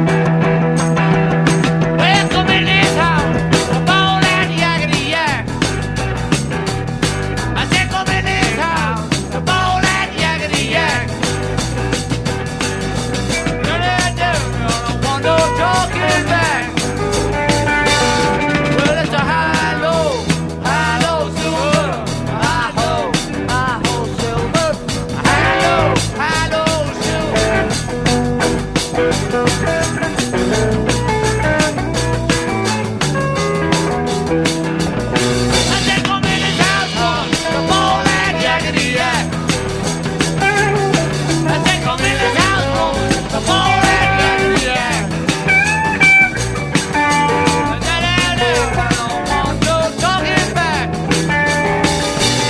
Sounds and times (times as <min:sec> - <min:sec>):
Music: 0:00.0 - 0:52.5.